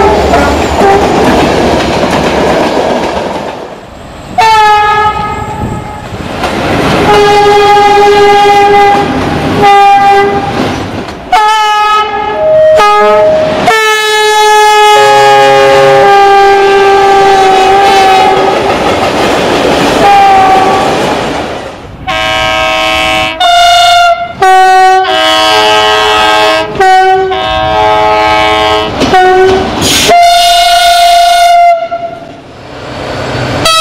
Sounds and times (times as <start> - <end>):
Train horn: 0.0 - 1.2, 4.4 - 6.1, 7.0 - 10.6, 11.3 - 18.6, 20.0 - 20.9, 22.0 - 32.3
Railroad car, train wagon: 0.0 - 33.8
Clickety-clack: 0.2 - 3.8, 6.4 - 7.1, 10.4 - 11.2, 17.9 - 21.6, 28.9 - 30.2.